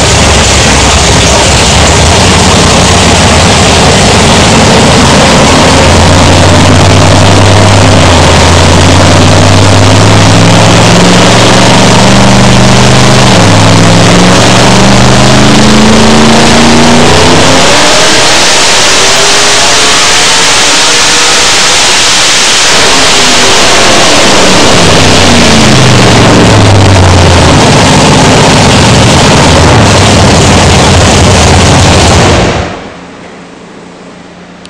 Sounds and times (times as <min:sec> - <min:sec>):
Truck: 0:00.0 - 0:34.6.